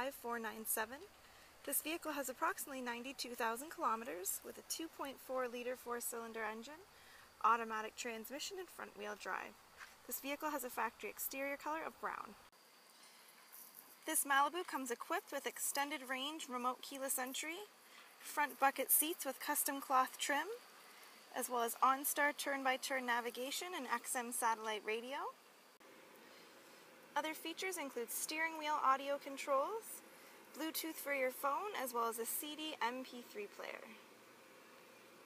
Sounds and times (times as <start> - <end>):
Speech: 0.0 - 1.1, 1.7 - 12.4, 14.1 - 20.6, 21.3 - 25.4, 27.2 - 30.0, 30.6 - 34.0.